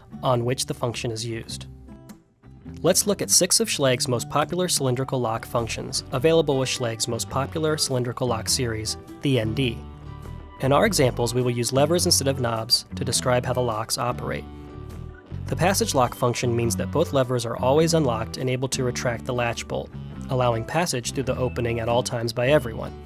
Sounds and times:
Music: 0.0 - 23.0
Speech: 0.2 - 1.7, 2.8 - 9.8, 10.6 - 14.5, 15.5 - 23.0.

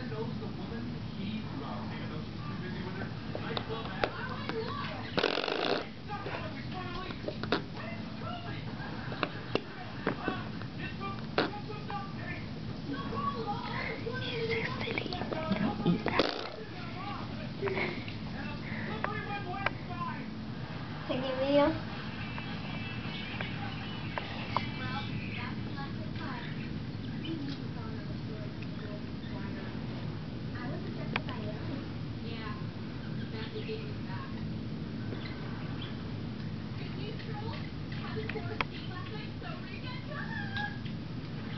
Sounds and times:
Inside, small room: 0.0 - 41.5.

